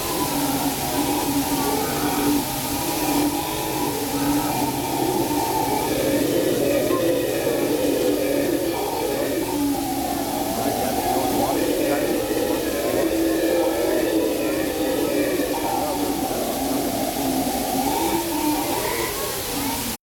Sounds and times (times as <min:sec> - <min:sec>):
Speech: 0:00.0 - 0:20.0.